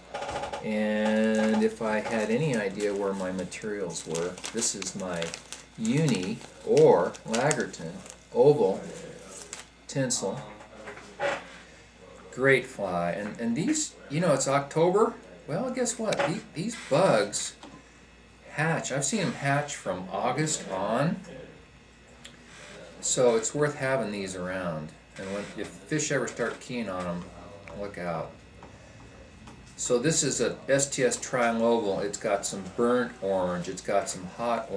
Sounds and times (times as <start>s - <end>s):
Speech: 0.6s - 17.6s, 18.5s - 21.6s, 22.2s - 28.4s, 29.2s - 34.7s.